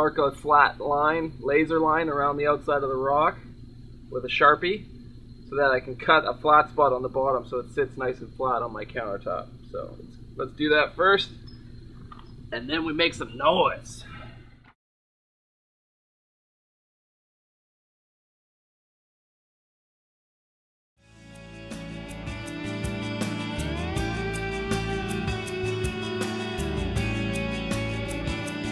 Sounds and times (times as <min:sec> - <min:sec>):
Speech: 0:00.0 - 0:03.4, 0:04.2 - 0:04.8, 0:05.5 - 0:11.3, 0:12.6 - 0:14.2.